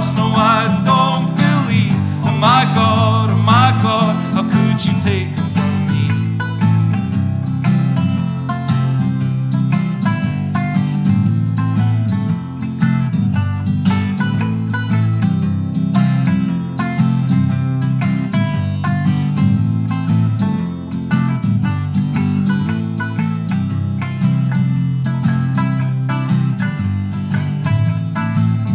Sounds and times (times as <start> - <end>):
Acoustic guitar: 0.0 - 28.7.